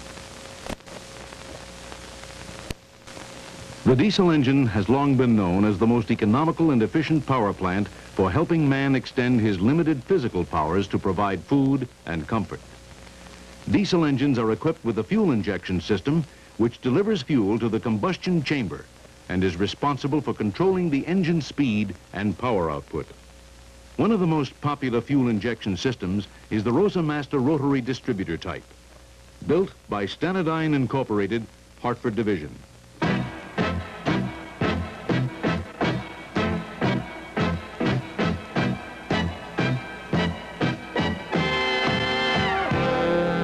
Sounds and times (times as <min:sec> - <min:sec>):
Music: 0:03.8 - 0:10.9, 0:33.0 - 0:43.4
Speech: 0:03.8 - 0:12.7, 0:13.7 - 0:23.2, 0:24.0 - 0:28.7, 0:29.4 - 0:32.7.